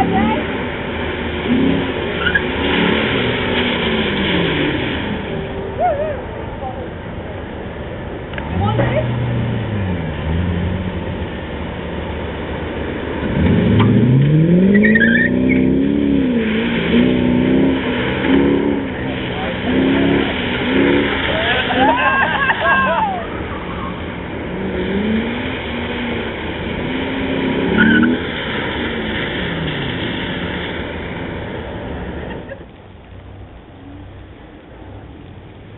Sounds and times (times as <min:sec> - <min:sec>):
Car: 0:00.0 - 0:35.7.